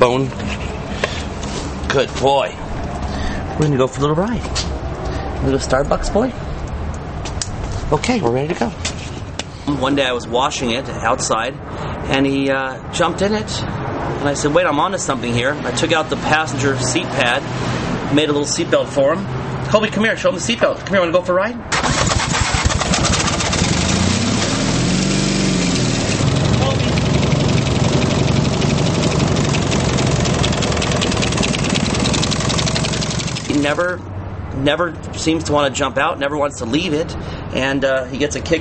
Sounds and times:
Speech: 0.0 - 0.4, 1.9 - 2.6, 3.6 - 4.5, 5.4 - 6.4, 7.9 - 8.8, 9.7 - 17.4, 18.1 - 21.6, 26.6 - 27.0, 33.5 - 34.0, 34.6 - 38.6.

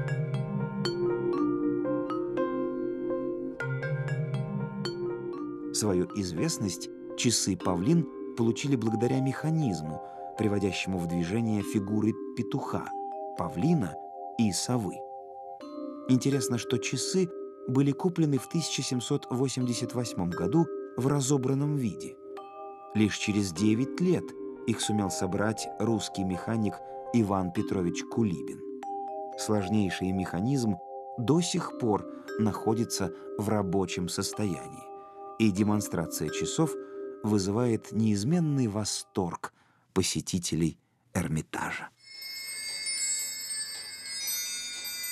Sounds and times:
Music: 0.0 - 39.6, 41.6 - 45.1
Speech: 5.8 - 15.0, 16.1 - 22.2, 23.0 - 28.6, 29.4 - 42.0.

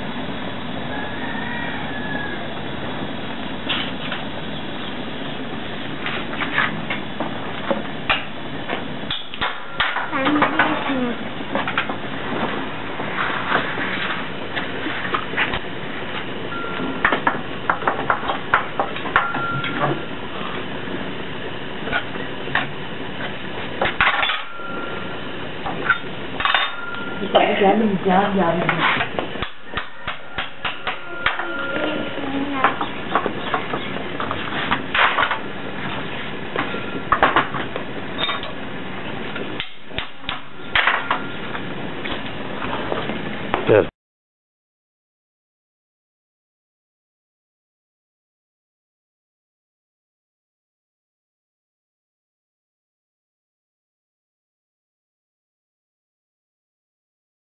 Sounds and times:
Speech: 10.1 - 11.2, 27.2 - 29.0, 43.7 - 43.9.

